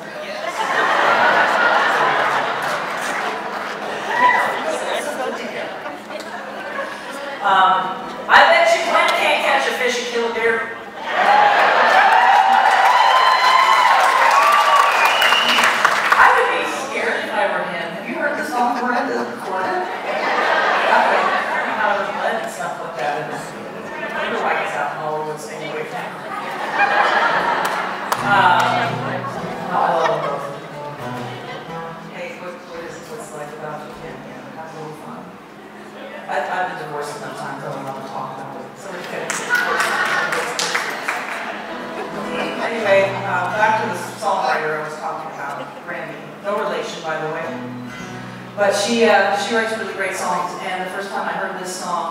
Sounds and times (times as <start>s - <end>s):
Speech: 7.1s - 10.8s, 20.8s - 26.4s, 32.2s - 41.0s, 42.3s - 47.6s, 48.6s - 52.1s
Music: 28.1s - 32.4s, 41.6s - 43.9s, 47.4s - 48.7s.